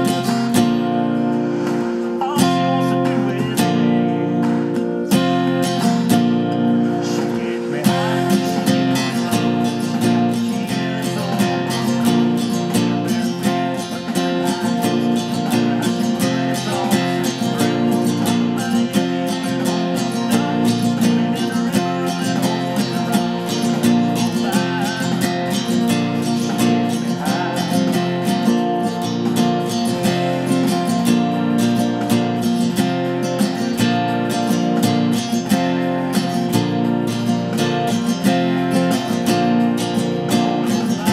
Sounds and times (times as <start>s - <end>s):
Acoustic guitar: 0.0s - 41.1s
Strum: 0.0s - 41.1s.